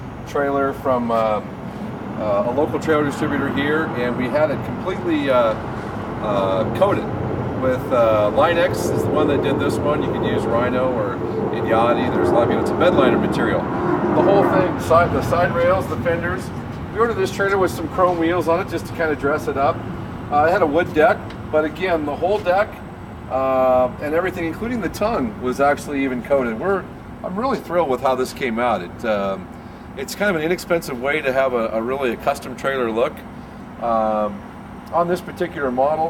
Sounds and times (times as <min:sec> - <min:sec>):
Speech: 0:00.3 - 0:01.5, 0:02.2 - 0:05.6, 0:06.2 - 0:36.1.